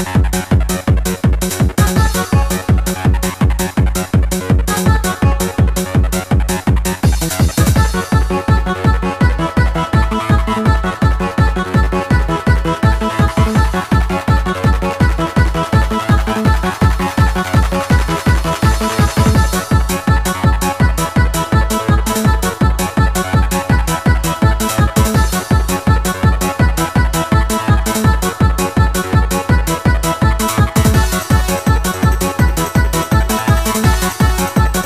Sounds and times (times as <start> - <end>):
Techno: 0.0 - 34.8.